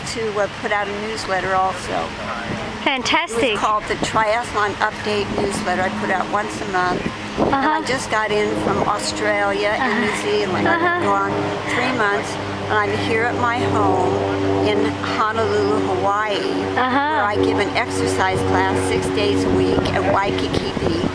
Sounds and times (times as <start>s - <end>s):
Speech: 0.0s - 21.1s.